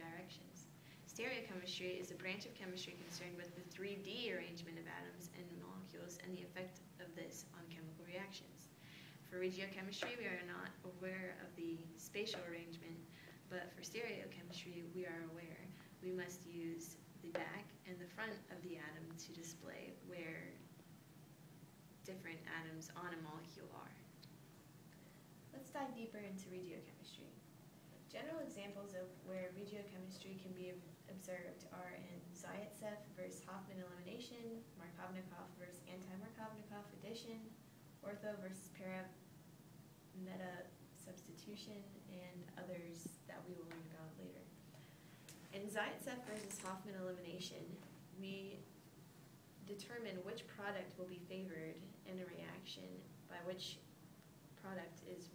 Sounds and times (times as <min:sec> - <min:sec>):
Speech: 0:00.0 - 0:20.7, 0:22.0 - 0:24.2, 0:25.5 - 0:27.4, 0:28.0 - 0:39.2, 0:40.2 - 0:44.6, 0:45.5 - 0:48.7, 0:49.6 - 0:53.9, 0:54.6 - 0:55.3.